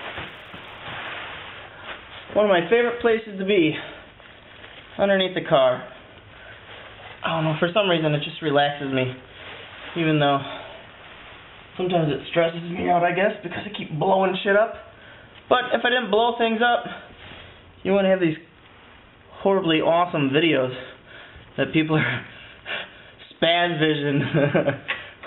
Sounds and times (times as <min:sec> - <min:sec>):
Speech: 0:02.3 - 0:04.0, 0:05.0 - 0:06.0, 0:07.2 - 0:09.3, 0:10.0 - 0:10.8, 0:11.8 - 0:14.9, 0:15.5 - 0:17.1, 0:17.8 - 0:18.5, 0:19.4 - 0:21.0, 0:21.6 - 0:22.3, 0:23.3 - 0:24.3.